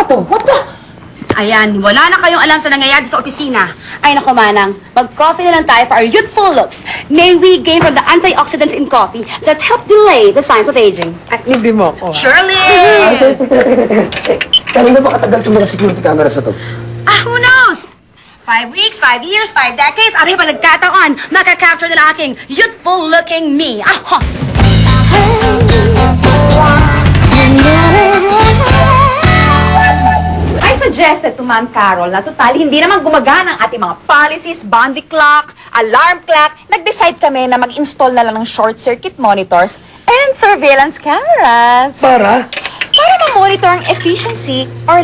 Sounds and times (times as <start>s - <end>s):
Music: 24.2s - 30.6s.